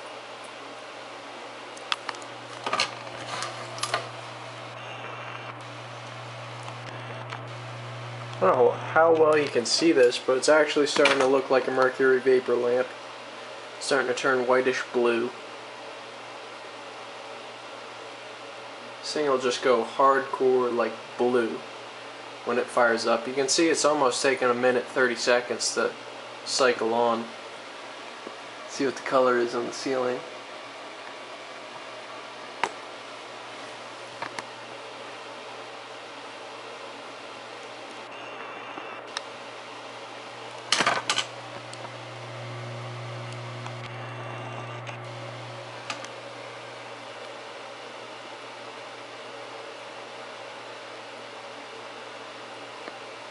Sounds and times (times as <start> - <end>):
Speech: 8.4 - 13.0, 13.8 - 15.4, 19.0 - 21.7, 22.4 - 27.4, 28.7 - 30.3.